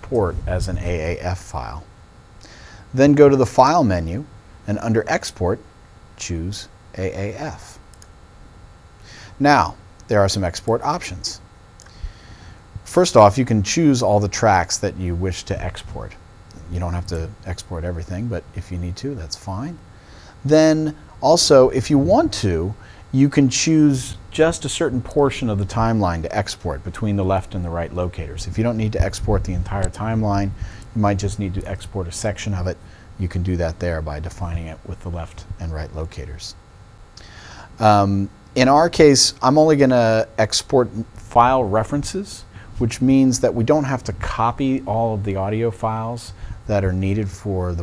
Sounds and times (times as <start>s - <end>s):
Speech: 0.0s - 1.9s, 2.9s - 7.8s, 9.3s - 11.5s, 12.8s - 19.8s, 20.4s - 36.6s, 37.8s - 47.8s.